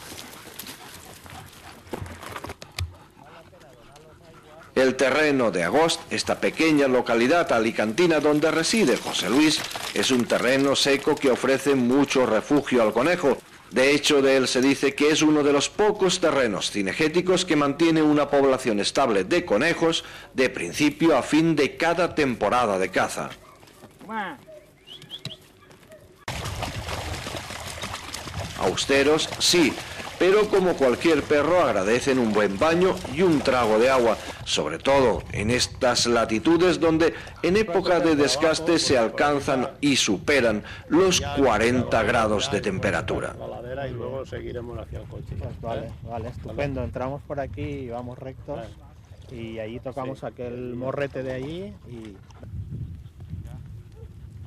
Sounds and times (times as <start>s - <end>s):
Speech: 3.3s - 23.4s, 28.6s - 52.2s.